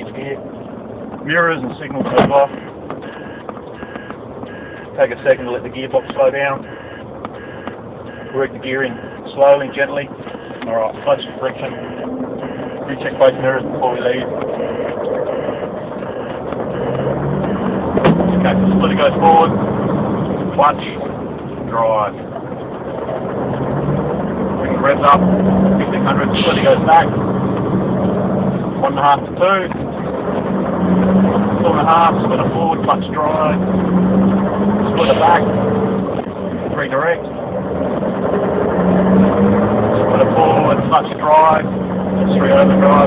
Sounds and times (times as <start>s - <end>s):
Speech: 0.0s - 0.4s, 1.2s - 2.6s, 5.0s - 6.7s, 8.4s - 12.0s, 12.9s - 14.3s, 18.3s - 19.5s, 20.6s - 21.0s, 21.7s - 22.2s, 24.6s - 25.2s, 25.8s - 27.1s, 28.8s - 29.7s, 31.6s - 33.6s, 34.9s - 35.5s, 36.8s - 37.2s, 40.1s - 41.7s, 42.3s - 43.0s
Vehicle: 0.0s - 43.0s.